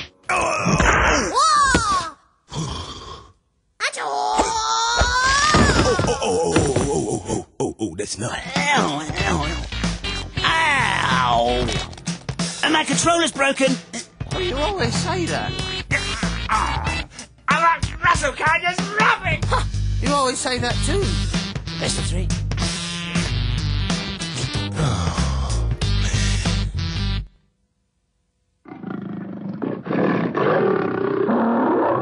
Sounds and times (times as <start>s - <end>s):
Groan: 0.3s - 3.3s, 24.7s - 25.6s
Music: 8.4s - 27.5s.